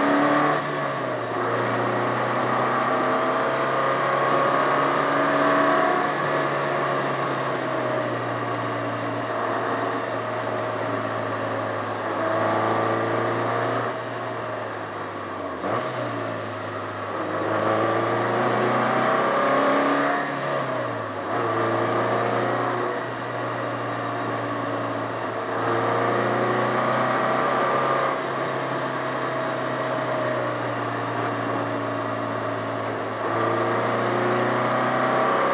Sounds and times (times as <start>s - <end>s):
Car: 0.0s - 35.5s
Outside, rural or natural: 0.0s - 35.5s.